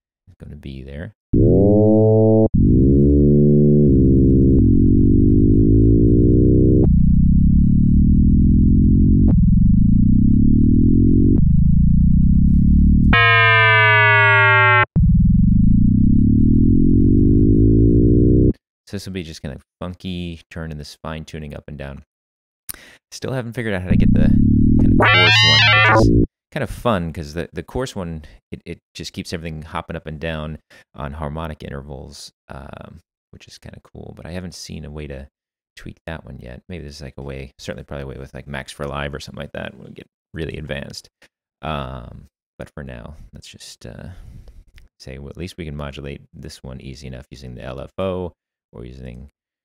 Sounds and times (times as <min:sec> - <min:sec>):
Speech: 0:00.3 - 0:01.2, 0:18.9 - 0:22.1, 0:23.1 - 0:24.4, 0:26.5 - 0:44.3, 0:45.0 - 0:49.4
Synthesizer: 0:13.2 - 0:14.9, 0:24.8 - 0:26.3.